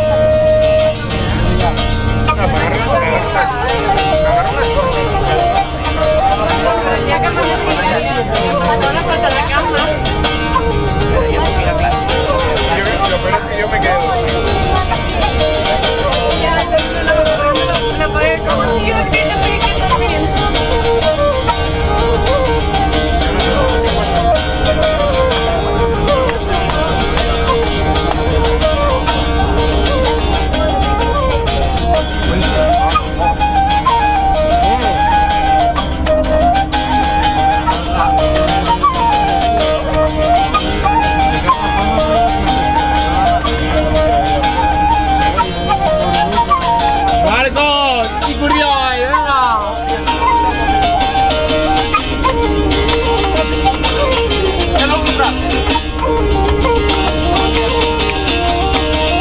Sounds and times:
Speech: 0.0 - 20.8, 34.5 - 35.4, 45.4 - 50.5, 54.7 - 55.8
Music: 0.0 - 59.2.

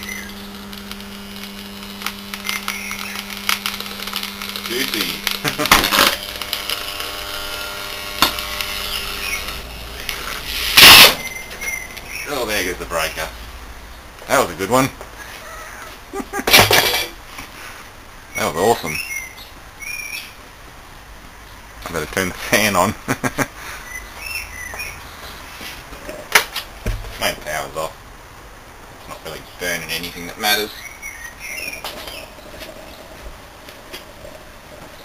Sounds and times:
Speech: 4.7 - 5.3, 12.3 - 13.3, 14.3 - 15.0, 18.4 - 19.0, 21.8 - 23.0, 27.2 - 28.0, 29.1 - 30.8.

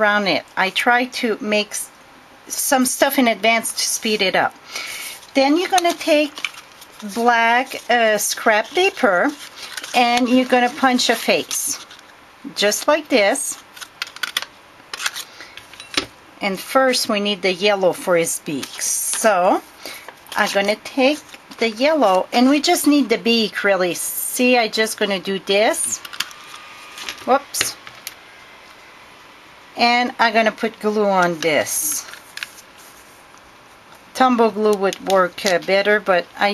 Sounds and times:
Speech: 0.0 - 1.9, 2.5 - 4.6, 5.3 - 6.4, 7.0 - 11.8, 12.5 - 13.6, 16.4 - 19.7, 20.4 - 26.0, 27.3 - 27.8, 29.8 - 32.1, 34.2 - 36.5.

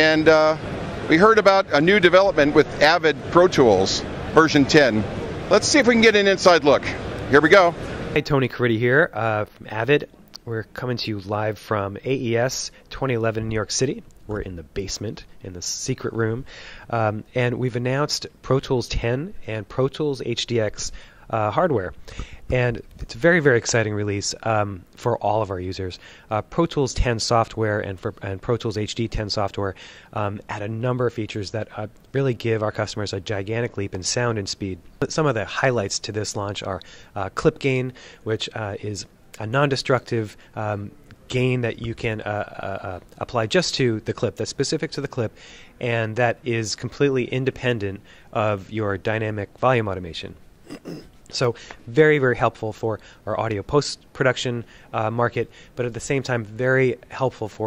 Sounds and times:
Speech: 0.0 - 57.6.

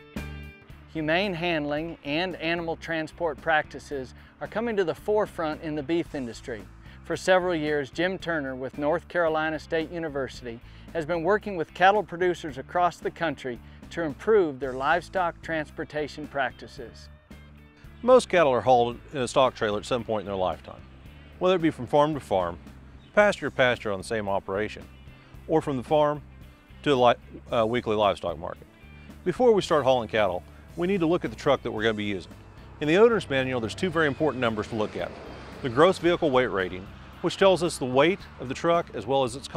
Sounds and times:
Music: 0.0 - 39.5
Speech: 0.9 - 17.1, 18.0 - 20.8, 21.4 - 22.6, 23.2 - 24.9, 25.5 - 26.2, 26.8 - 39.5.

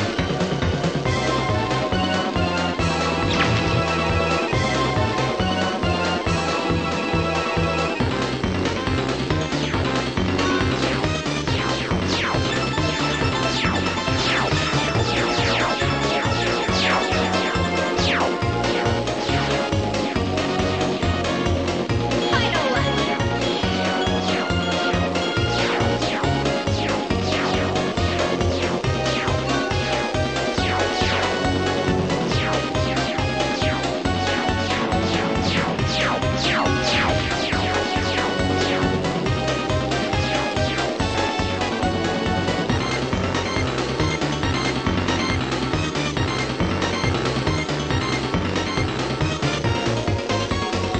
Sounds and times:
Music: 0.0 - 50.9.

